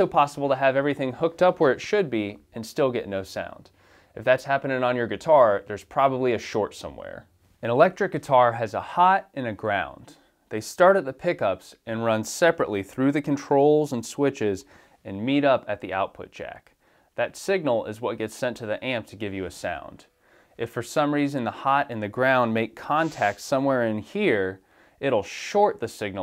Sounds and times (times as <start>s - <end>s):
Speech: 0.0s - 26.2s.